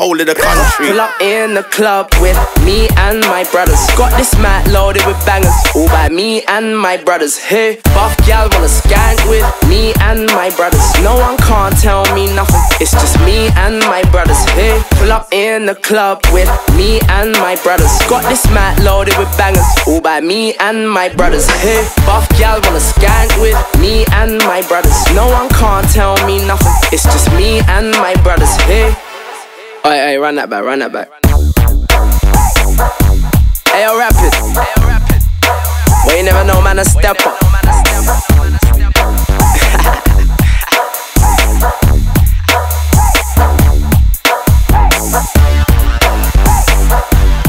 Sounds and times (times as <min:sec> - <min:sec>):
Speech: 0:00.0 - 0:02.1, 0:29.9 - 0:31.2, 0:33.7 - 0:35.2, 0:35.9 - 0:40.0
Music: 0:00.1 - 0:30.2, 0:31.1 - 0:47.4.